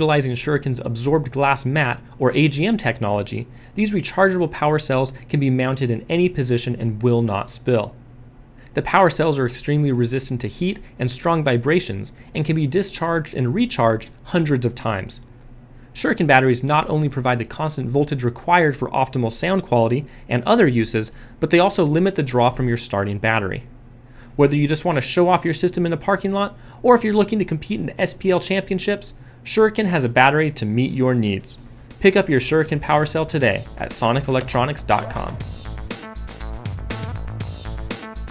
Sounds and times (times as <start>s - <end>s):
Speech: 0.0s - 8.0s, 8.8s - 15.3s, 16.0s - 23.7s, 24.4s - 35.4s.